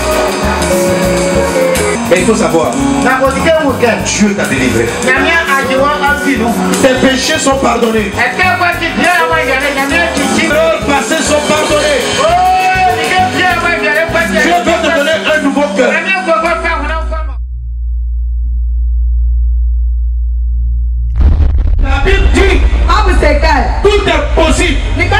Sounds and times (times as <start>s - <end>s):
Music: 0.0s - 17.4s, 21.7s - 25.1s
Speech: 2.1s - 17.4s.